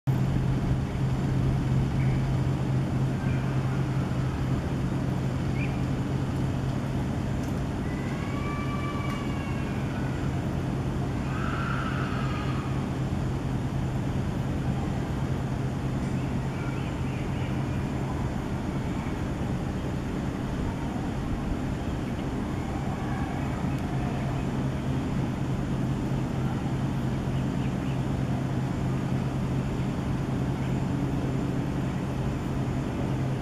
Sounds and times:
Bird vocalization, bird call, bird song: 1.9 - 2.4, 3.2 - 3.8, 5.5 - 5.9, 16.0 - 18.3, 27.2 - 28.1.

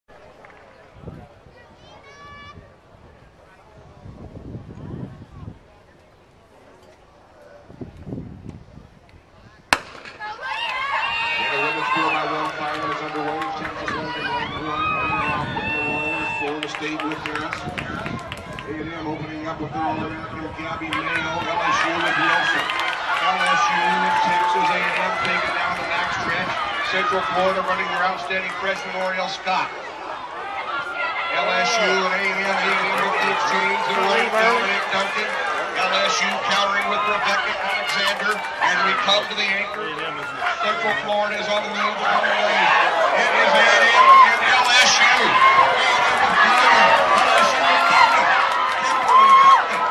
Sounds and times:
Speech: 31.3 - 49.9.

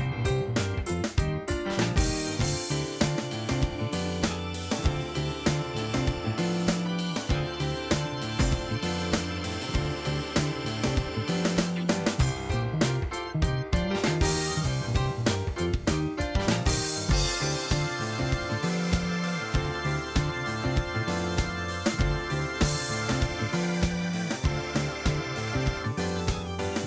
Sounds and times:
Music: 0.0 - 26.8.

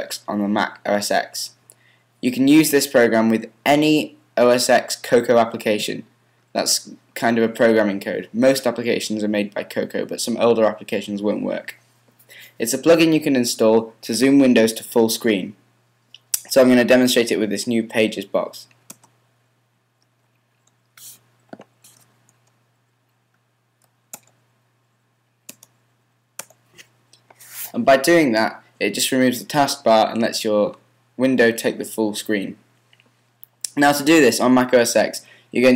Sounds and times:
Speech: 0.0 - 1.6, 2.2 - 11.8, 12.6 - 15.6, 16.4 - 18.8, 27.7 - 32.6, 33.7 - 35.7.

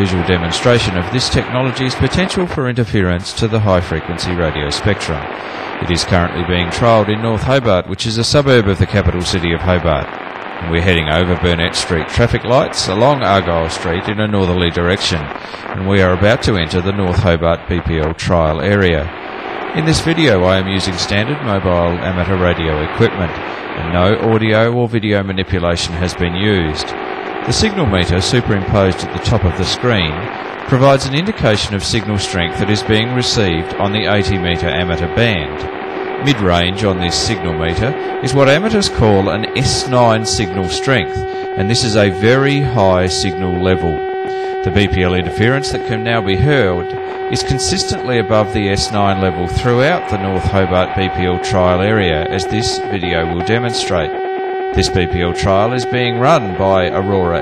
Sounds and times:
Speech: 0.0 - 44.0, 44.6 - 54.1, 54.8 - 57.4
Radio: 0.0 - 57.4.

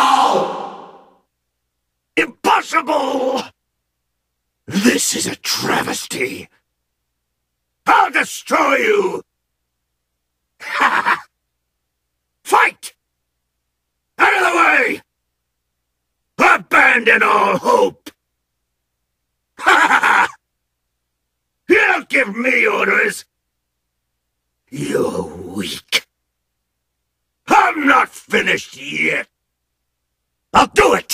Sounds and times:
Speech: 2.2 - 3.6, 4.7 - 6.6, 7.9 - 9.3, 12.4 - 13.0, 14.2 - 15.1, 16.4 - 18.2, 21.7 - 23.3, 24.7 - 26.2, 27.5 - 29.3, 30.5 - 31.1.

